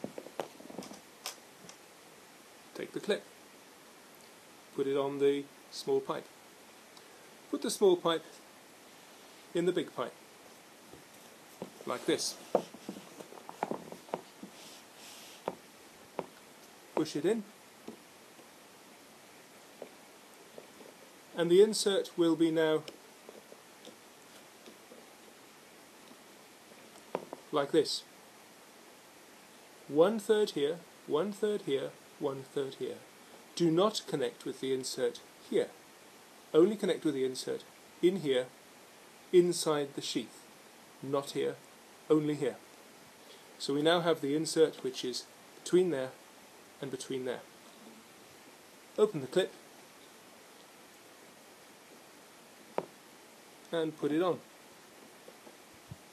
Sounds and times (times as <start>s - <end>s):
Inside, small room: 0.0s - 56.1s
Speech: 2.8s - 3.3s, 4.8s - 6.3s, 7.5s - 8.4s, 9.5s - 10.2s, 11.9s - 12.4s, 17.0s - 17.5s, 21.4s - 22.9s, 27.5s - 28.1s, 29.9s - 35.8s, 36.6s - 38.5s, 39.4s - 40.4s, 41.0s - 42.6s, 43.6s - 46.2s, 46.8s - 47.5s, 49.0s - 49.6s, 53.7s - 54.4s.